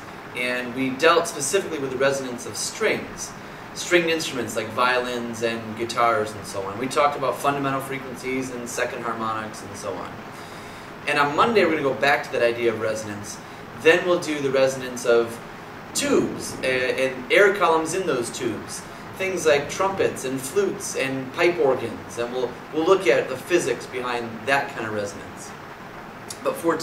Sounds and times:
Speech: 0.4 - 10.2, 11.0 - 25.5, 26.3 - 26.8.

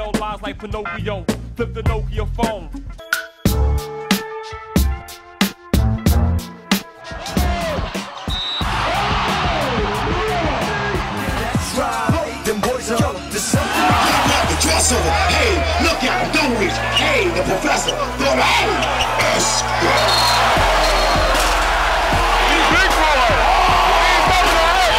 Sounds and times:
Music: 0.0 - 24.9
Speech: 14.0 - 20.0, 22.4 - 24.9.

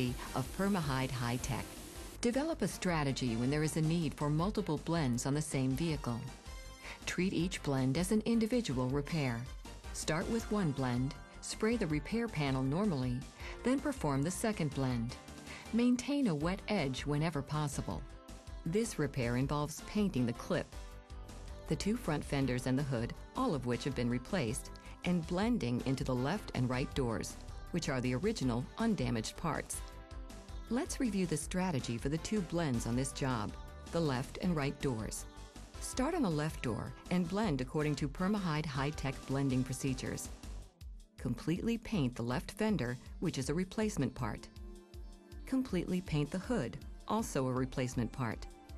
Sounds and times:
Speech: 0.0 - 1.6, 2.2 - 6.3, 7.1 - 18.0, 18.7 - 20.7, 21.7 - 29.8, 30.7 - 35.2, 35.8 - 40.3, 41.2 - 44.5, 45.5 - 48.5
Music: 0.0 - 48.7.

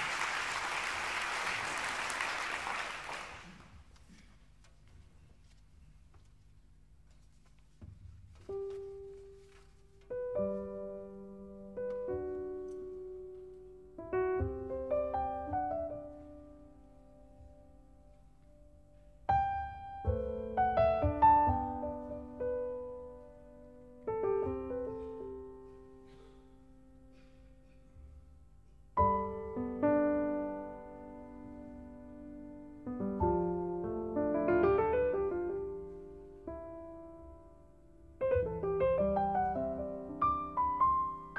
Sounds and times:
Music: 7.8 - 41.3.

